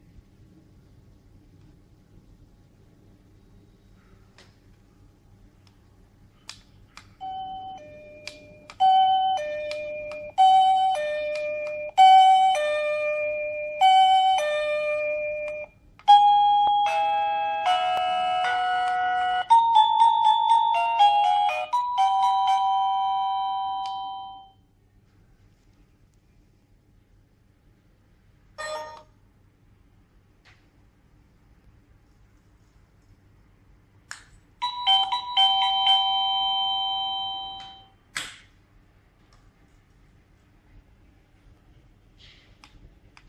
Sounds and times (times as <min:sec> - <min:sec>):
Doorbell: 0:07.2 - 0:24.6, 0:28.6 - 0:29.1, 0:34.6 - 0:38.0
Music: 0:16.8 - 0:22.6.